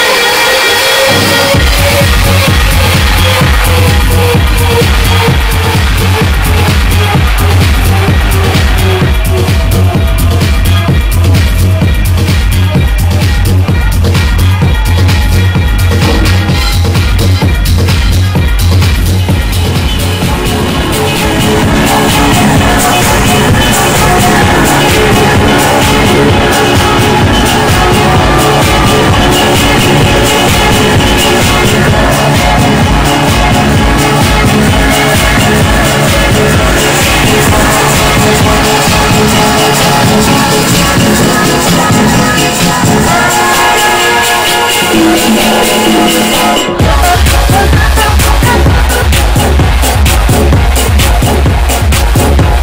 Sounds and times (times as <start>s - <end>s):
Disco: 0.0s - 52.6s.